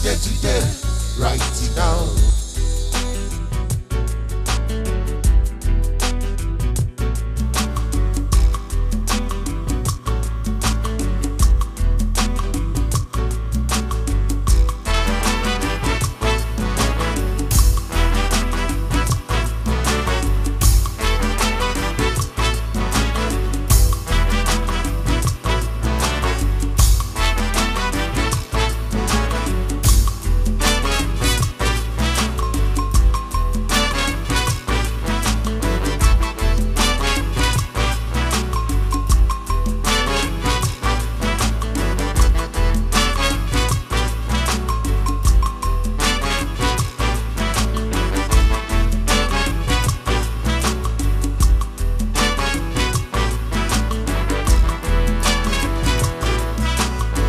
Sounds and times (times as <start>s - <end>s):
Funk: 0.0s - 57.2s
Jingle (music): 0.0s - 57.2s.